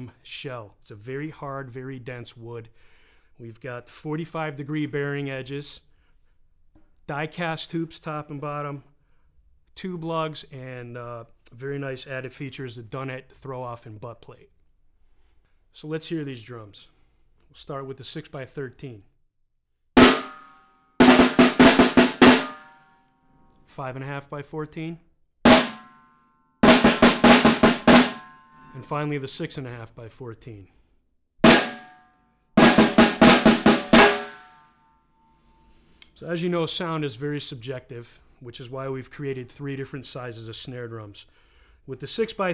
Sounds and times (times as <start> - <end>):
Speech: 0.0 - 2.8, 3.4 - 5.9, 7.0 - 8.9, 9.7 - 14.6, 15.7 - 16.9, 17.5 - 19.2, 23.6 - 25.1, 28.7 - 30.8, 36.2 - 42.5
Drum roll: 20.0 - 20.4, 21.0 - 22.7, 25.5 - 26.0, 26.6 - 28.5, 31.4 - 32.0, 32.6 - 34.6
Drum kit: 20.0 - 22.8, 25.5 - 26.0, 26.6 - 28.9, 31.4 - 32.0, 32.6 - 34.6
Bass drum: 25.5 - 25.9, 26.6 - 28.3, 31.4 - 31.9, 32.6 - 34.5.